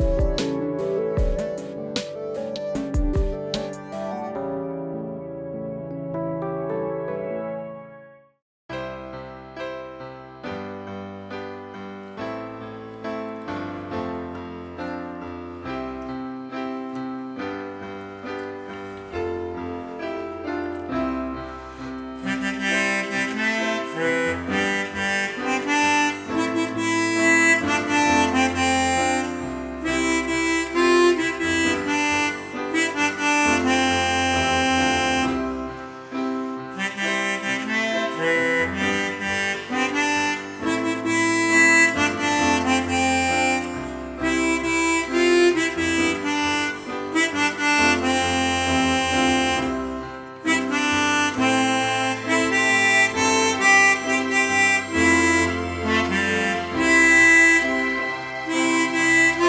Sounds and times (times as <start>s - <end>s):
Music: 0.0s - 59.4s.